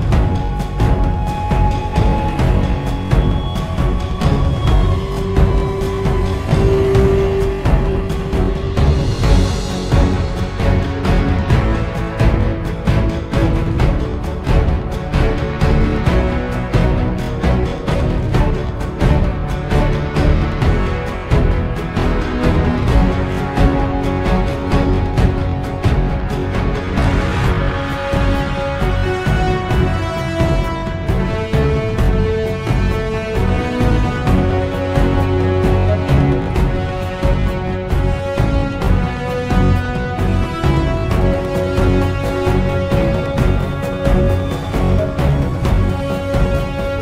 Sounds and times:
Theme music: 0.0s - 47.0s.

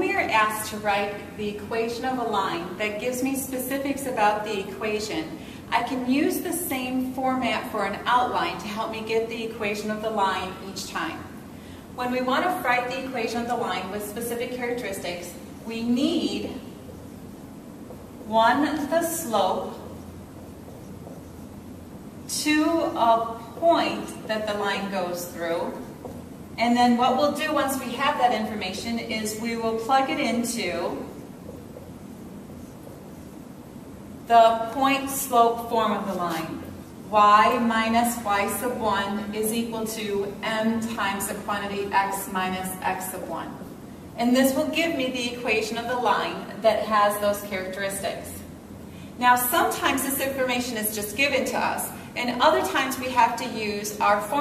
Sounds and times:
Speech: 0.0s - 11.3s, 12.0s - 16.6s, 18.3s - 19.8s, 22.3s - 25.8s, 26.6s - 31.1s, 34.3s - 43.6s, 44.2s - 48.5s, 49.2s - 54.4s.

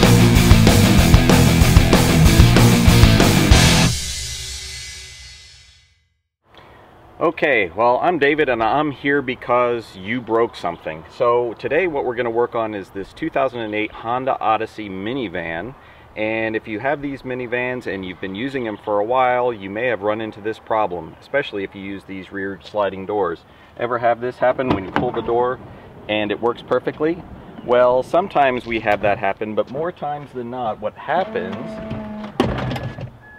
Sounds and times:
Speech: 7.2s - 31.9s.

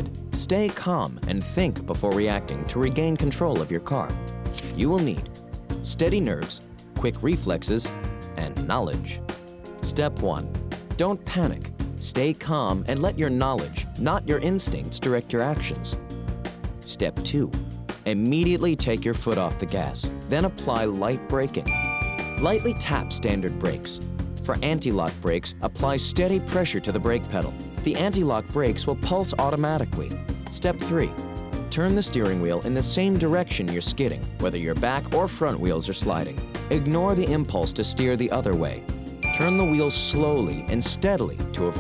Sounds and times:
Speech: 0.0s - 9.2s, 9.8s - 16.0s, 16.9s - 21.7s, 22.4s - 41.8s
Music: 0.0s - 41.8s.

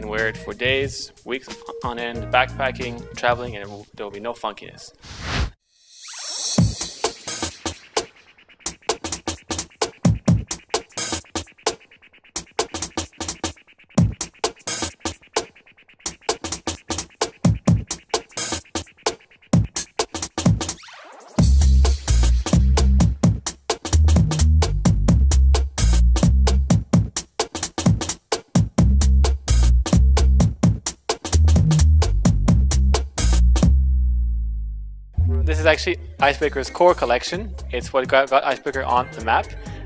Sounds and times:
Drum machine: 0.0s - 3.8s, 6.1s - 33.8s, 35.2s - 39.8s.

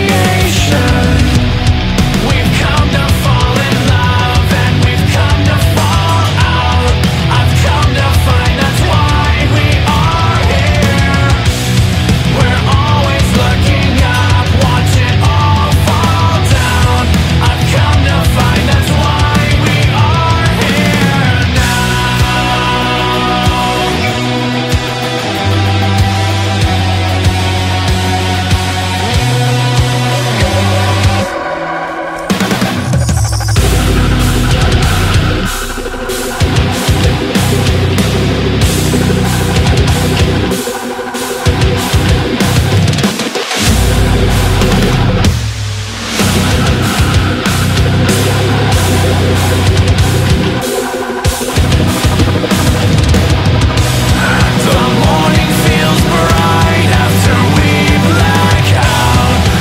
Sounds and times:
Angry music: 0.0s - 59.6s.

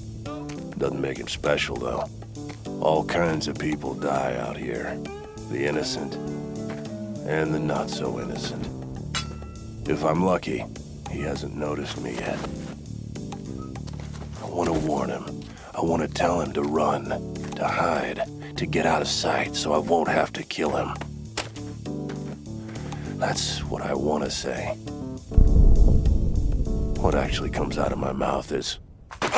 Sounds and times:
Music: 0.0s - 28.3s
Speech: 0.8s - 2.1s, 2.8s - 6.2s, 7.3s - 8.7s, 9.9s - 12.5s, 14.4s - 21.0s, 23.2s - 24.8s, 27.0s - 28.8s.

